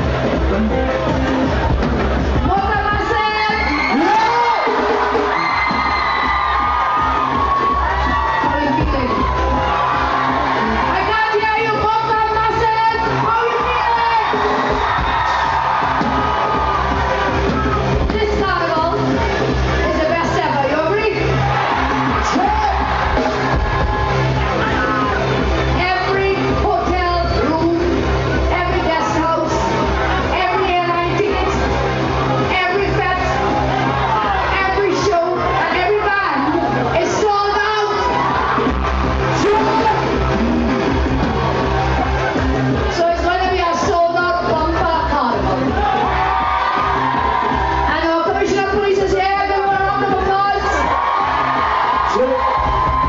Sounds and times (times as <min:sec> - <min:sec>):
Music: 0:00.0 - 0:53.0.